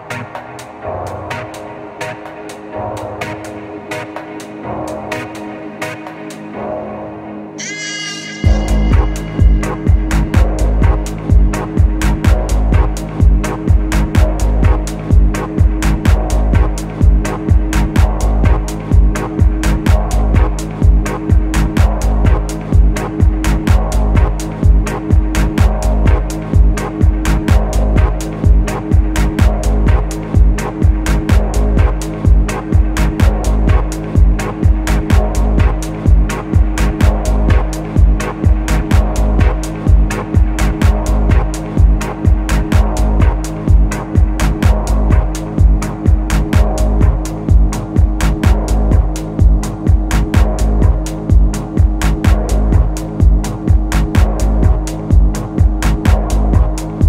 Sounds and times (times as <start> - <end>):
Soundtrack music: 0.0 - 57.0.